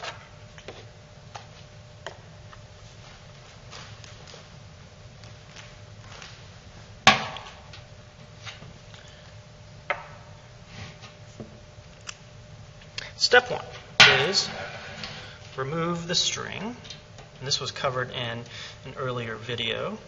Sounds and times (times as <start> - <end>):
Speech: 13.2 - 14.6, 15.6 - 16.8, 17.4 - 20.0.